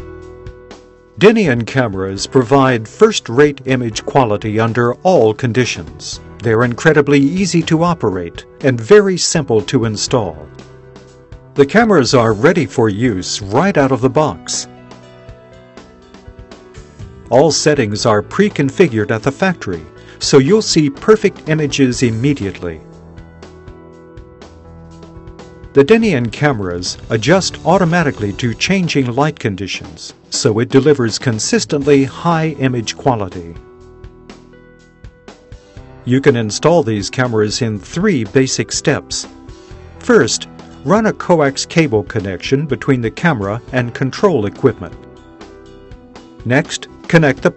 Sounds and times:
Music: 0.0s - 47.5s
Speech: 1.2s - 10.5s, 11.6s - 14.7s, 17.3s - 22.8s, 25.8s - 33.6s, 36.1s - 39.3s, 40.0s - 45.0s, 46.4s - 47.5s.

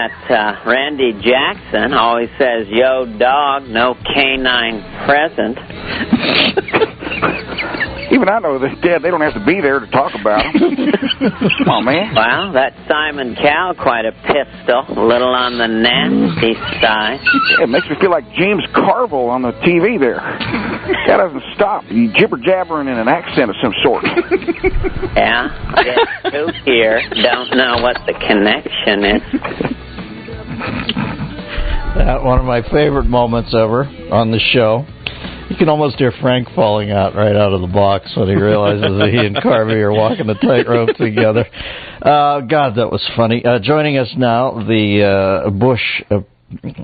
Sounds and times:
Music: 0.0s - 46.2s.

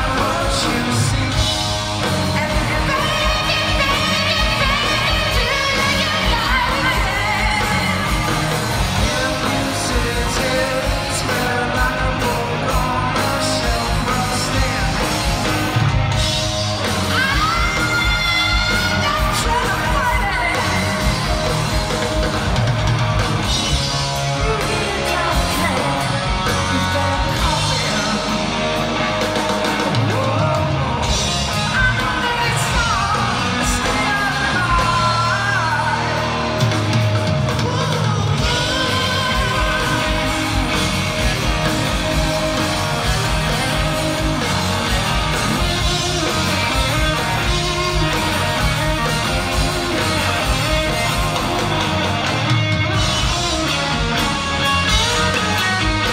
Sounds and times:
Singing: 0.0s - 15.8s, 17.0s - 21.8s, 24.2s - 51.7s
Inside, large room or hall: 0.0s - 56.1s
Music: 0.0s - 56.1s.

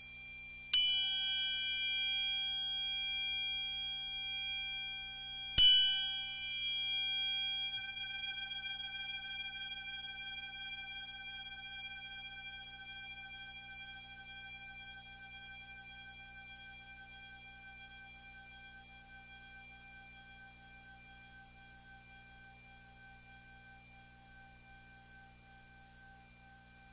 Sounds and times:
Music: 0.0s - 26.9s.

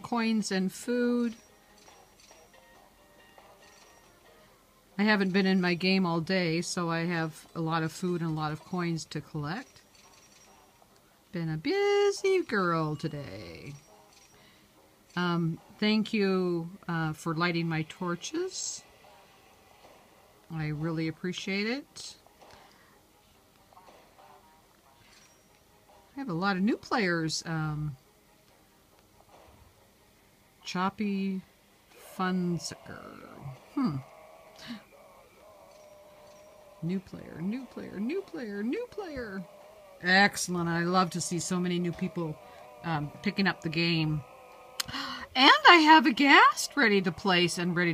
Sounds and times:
Speech: 5.0s - 9.7s, 11.3s - 13.8s, 15.2s - 18.8s, 26.2s - 28.0s, 30.6s - 31.4s, 36.8s - 44.2s, 45.4s - 47.9s.

